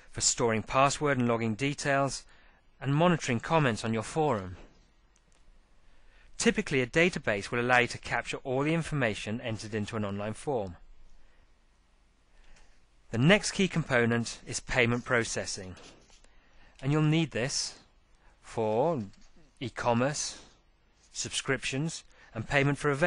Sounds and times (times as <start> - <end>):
Narration, monologue: 0.0 - 23.0.